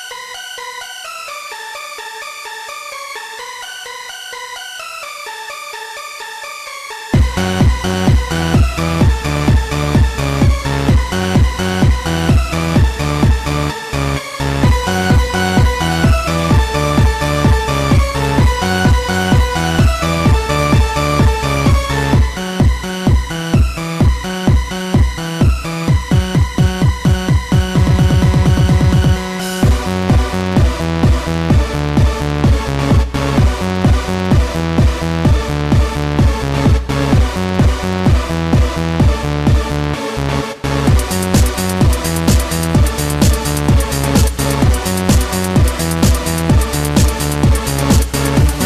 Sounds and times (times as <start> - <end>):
Techno: 0.0 - 48.6.